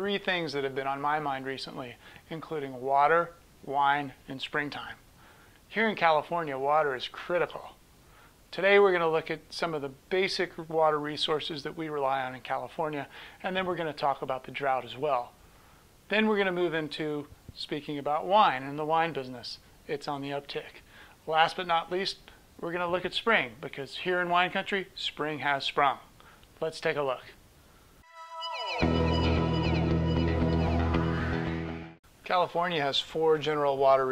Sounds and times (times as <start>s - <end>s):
Speech: 0.0s - 5.0s, 5.7s - 7.8s, 8.5s - 15.4s, 16.1s - 27.4s, 32.2s - 34.1s.